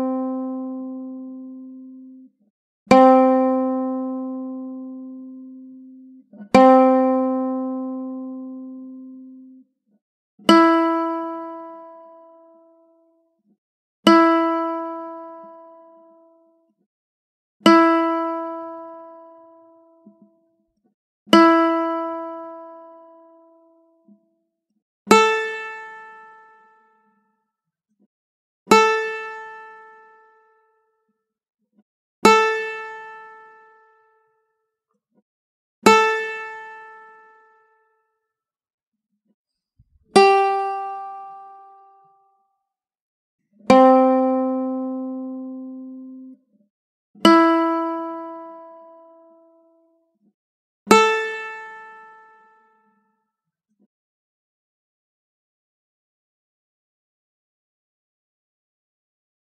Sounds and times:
Music: 0.0s - 16.9s, 17.6s - 27.7s, 28.7s - 31.3s, 32.2s - 34.9s, 35.8s - 38.4s, 39.8s - 42.8s, 43.6s - 53.5s.

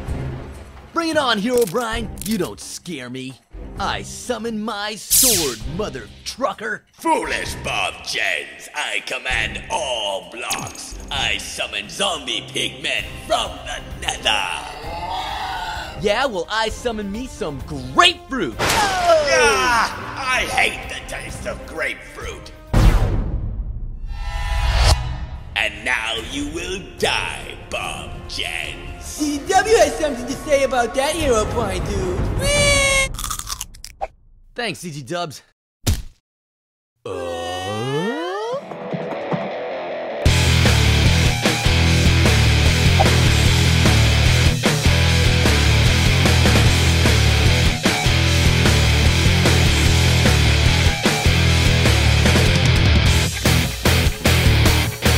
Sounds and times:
Music: 0.0s - 32.6s, 38.6s - 55.1s
Speech: 1.0s - 22.6s, 25.6s - 33.1s, 34.6s - 35.5s.

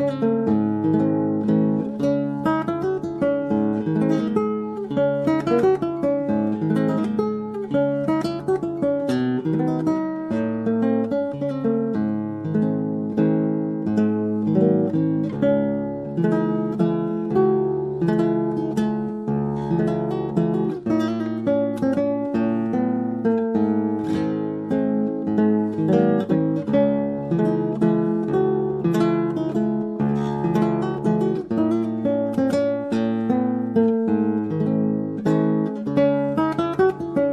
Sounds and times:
Guitar: 0.0s - 37.3s.

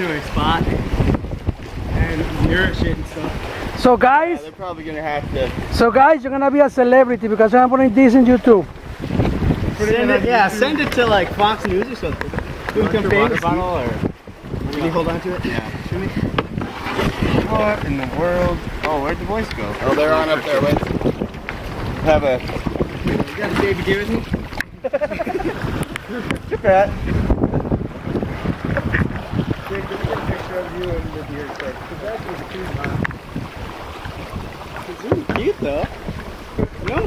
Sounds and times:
Boat, Water vehicle: 0.0s - 37.0s
Outside, rural or natural: 0.0s - 37.0s.

